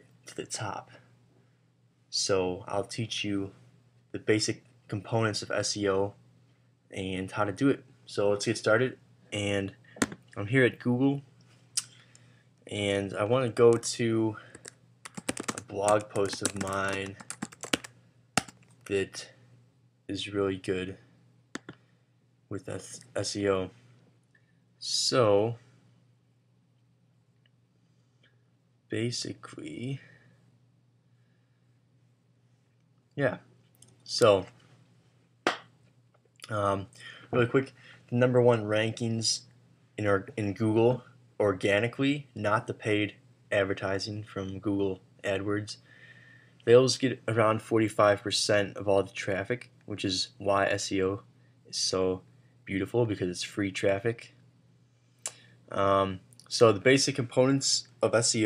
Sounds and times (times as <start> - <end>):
Speech: 0.3 - 1.0, 2.1 - 3.6, 4.2 - 6.2, 6.9 - 9.8, 10.4 - 11.3, 12.7 - 14.5, 15.5 - 17.2, 18.9 - 19.4, 20.1 - 21.0, 22.5 - 23.8, 24.8 - 25.6, 28.9 - 30.1, 33.2 - 33.5, 34.1 - 34.6, 36.4 - 45.8, 46.6 - 54.4, 55.7 - 58.4.